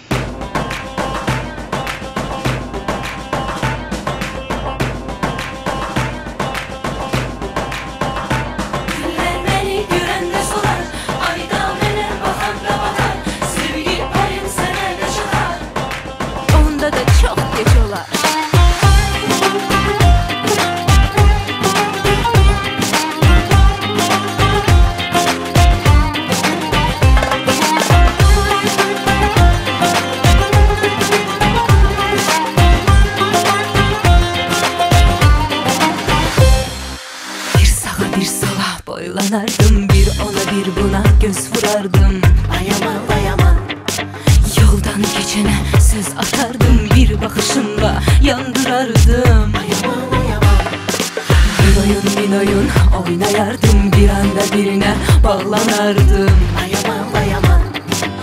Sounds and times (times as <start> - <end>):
Dance music: 0.0 - 58.2.